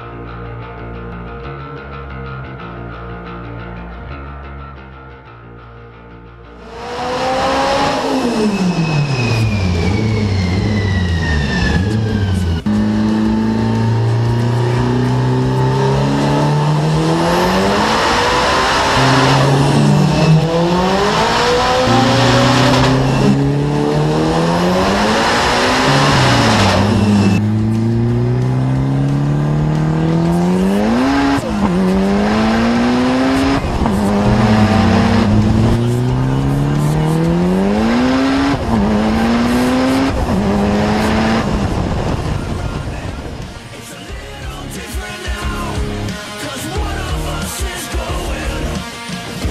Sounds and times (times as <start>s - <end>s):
Music: 0.0s - 49.5s
Race car, auto racing: 6.6s - 49.5s.